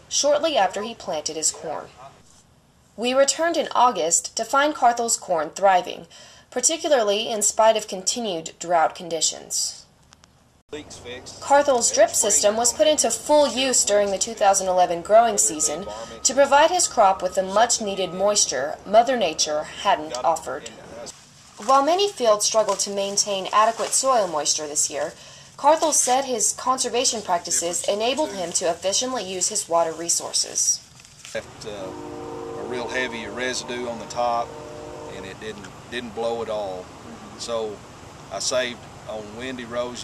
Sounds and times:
Speech: 0:00.1 - 0:02.2, 0:03.0 - 0:09.8, 0:10.7 - 0:30.8, 0:31.4 - 0:32.0, 0:32.6 - 0:40.0.

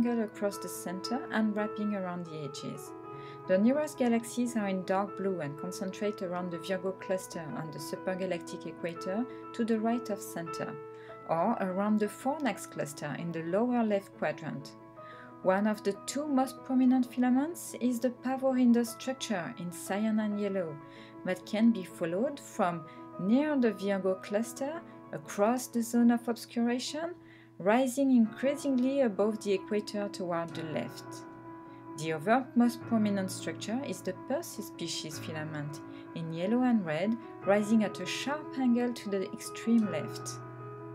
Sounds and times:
Speech: 0:00.0 - 0:02.9, 0:03.5 - 0:14.8, 0:15.4 - 0:31.2, 0:32.0 - 0:40.4
Music: 0:00.0 - 0:40.9.

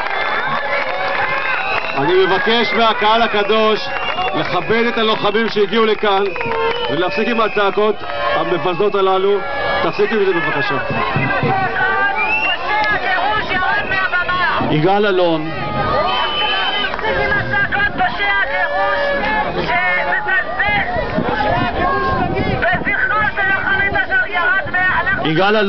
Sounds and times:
Speech: 0:02.0 - 0:15.5, 0:16.7 - 0:25.6.

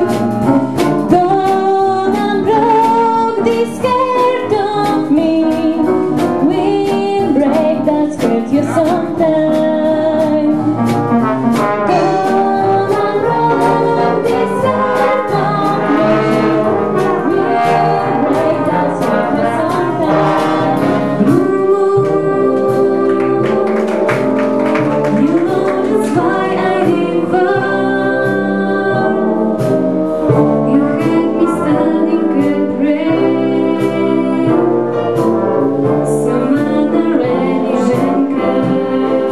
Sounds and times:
Orchestra: 0:00.0 - 0:39.3
Trombone: 0:00.0 - 0:39.3
Trumpet: 0:00.0 - 0:39.3.

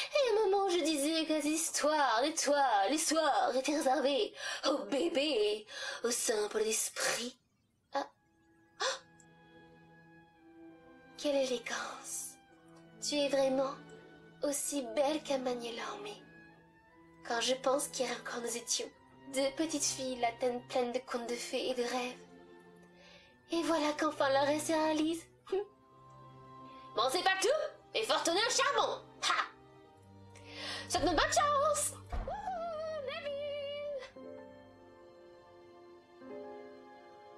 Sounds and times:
Speech: 0:00.0 - 0:07.4, 0:17.3 - 0:22.2, 0:23.5 - 0:25.7, 0:27.0 - 0:29.6, 0:30.9 - 0:34.1
Music: 0:00.0 - 0:37.3.

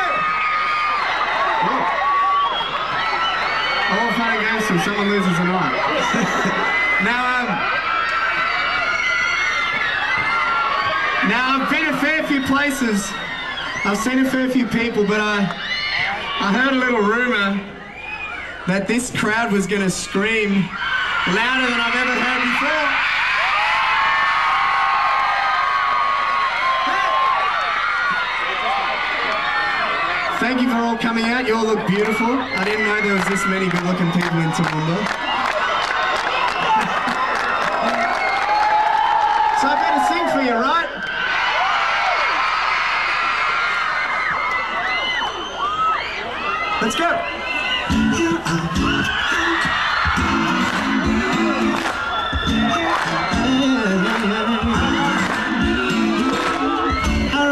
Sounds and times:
Speech: 0:03.9 - 0:05.8, 0:11.2 - 0:13.2, 0:13.8 - 0:15.5, 0:16.4 - 0:17.7, 0:18.7 - 0:20.7, 0:21.3 - 0:23.0, 0:30.4 - 0:35.1, 0:39.6 - 0:40.9, 0:46.8 - 0:47.2.

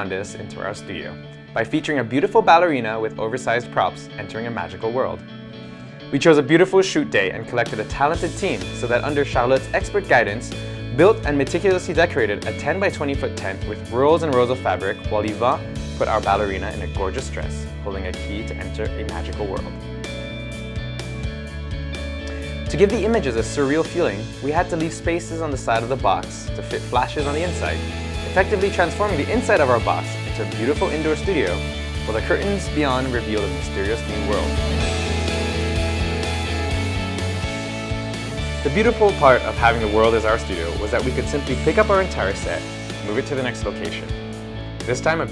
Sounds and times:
Speech: 0:00.0 - 0:05.2, 0:06.1 - 0:19.7, 0:22.7 - 0:34.8, 0:38.6 - 0:44.1, 0:44.9 - 0:45.3
Music: 0:00.0 - 0:45.3.

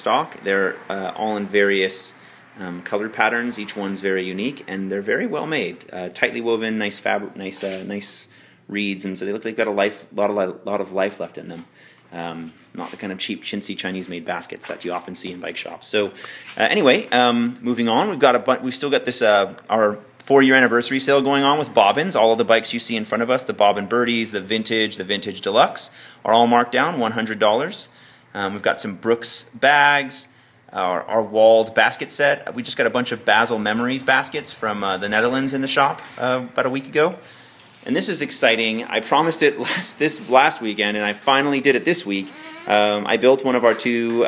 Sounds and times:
Speech: 0:00.0 - 0:37.2, 0:37.8 - 0:44.2.

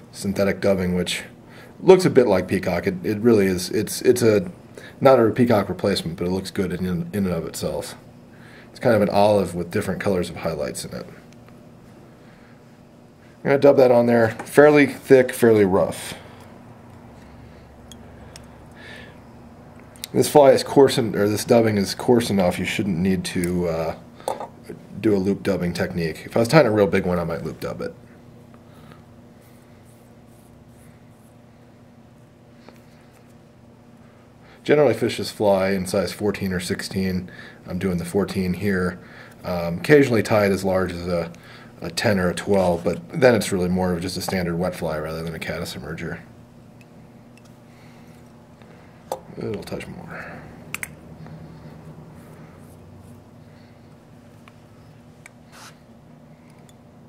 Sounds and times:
Inside, small room: 0:00.0 - 0:57.0
Speech: 0:00.1 - 0:08.0, 0:08.8 - 0:11.2, 0:13.4 - 0:16.2, 0:20.1 - 0:24.0, 0:24.7 - 0:28.0, 0:34.6 - 0:46.3, 0:49.3 - 0:50.4.

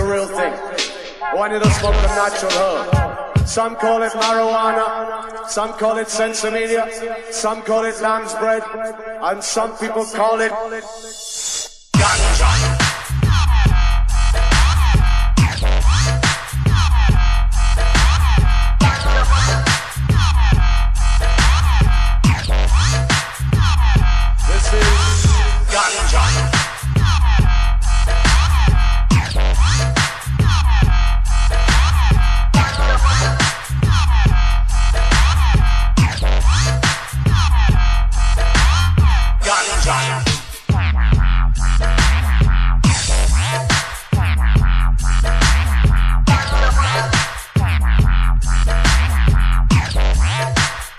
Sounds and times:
Electronic music: 0:00.0 - 0:50.9.

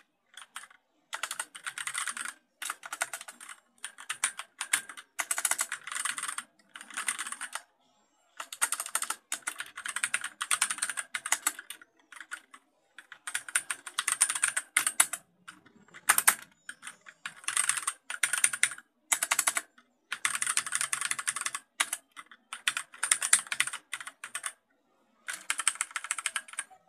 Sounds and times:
Computer keyboard: 0:00.3 - 0:07.6, 0:08.4 - 0:24.6, 0:25.2 - 0:26.8.

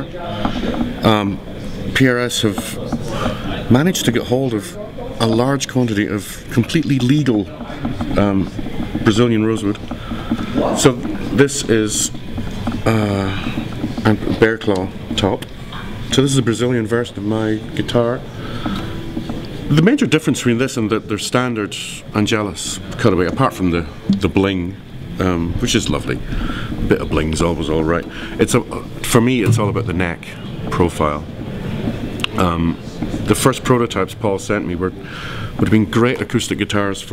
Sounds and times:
Speech: 0:00.0 - 0:09.8, 0:10.6 - 0:12.2, 0:12.8 - 0:15.5, 0:16.1 - 0:18.3, 0:19.7 - 0:26.2, 0:26.8 - 0:31.3, 0:32.2 - 0:37.1.

